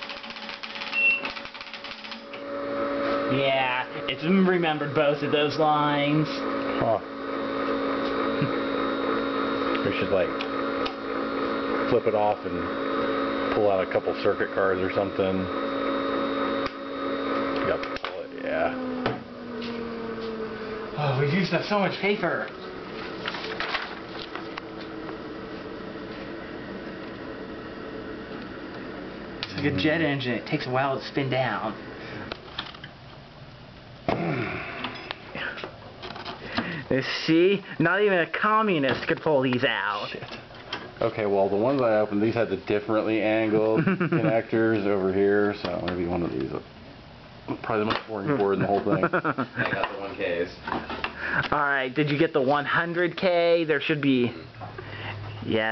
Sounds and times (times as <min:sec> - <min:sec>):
Speech: 0:03.3 - 0:07.0, 0:09.8 - 0:10.4, 0:13.5 - 0:15.5, 0:21.0 - 0:22.5, 0:36.9 - 0:40.3, 0:41.0 - 0:46.6, 0:51.5 - 0:54.4.